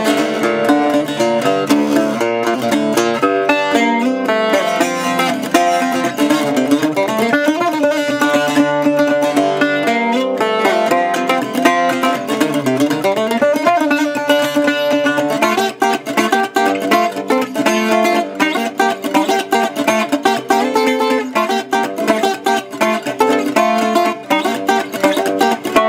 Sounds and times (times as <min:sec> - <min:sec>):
Acoustic guitar: 0:00.0 - 0:25.8
Mandolin: 0:00.0 - 0:25.8.